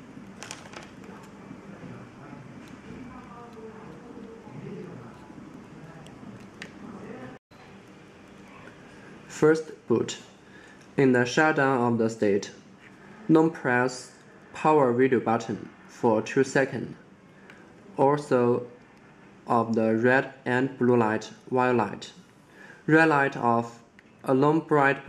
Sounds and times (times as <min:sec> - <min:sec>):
Speech: 0:01.1 - 0:07.9, 0:09.3 - 0:10.3, 0:11.0 - 0:12.6, 0:13.2 - 0:17.0, 0:17.9 - 0:18.8, 0:19.5 - 0:22.2, 0:22.9 - 0:25.0.